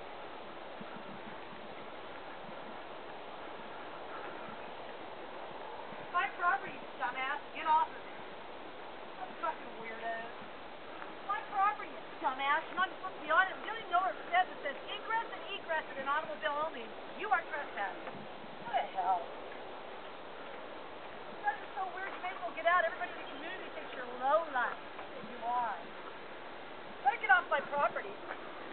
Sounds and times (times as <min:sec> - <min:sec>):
Speech: 0:11.3 - 0:18.0, 0:21.4 - 0:25.8, 0:27.0 - 0:28.2.